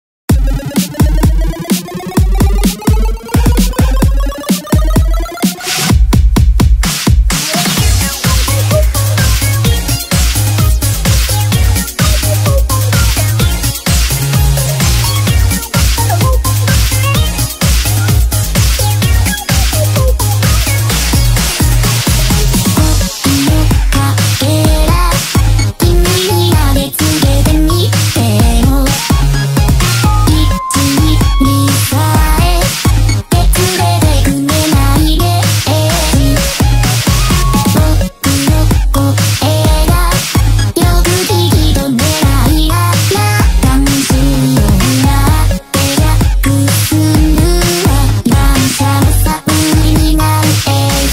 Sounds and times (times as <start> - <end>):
Sampler: 0.3 - 6.0, 7.3 - 51.1.